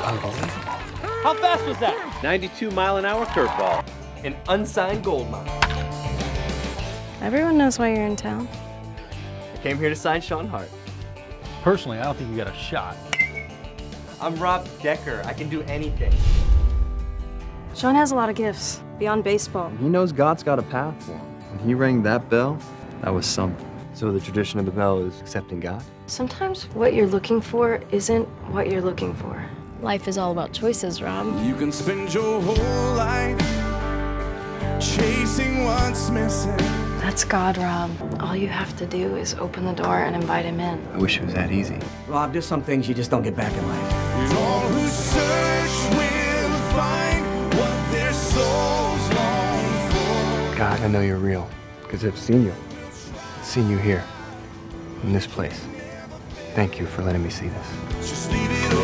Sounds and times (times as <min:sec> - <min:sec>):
Music: 0:00.0 - 0:58.8.